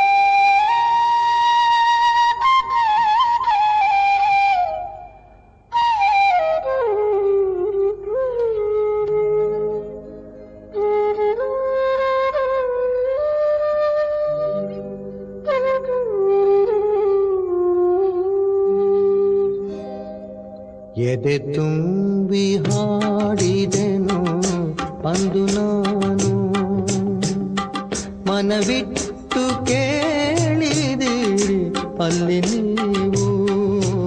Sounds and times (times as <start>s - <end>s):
Flute: 0.0s - 21.6s.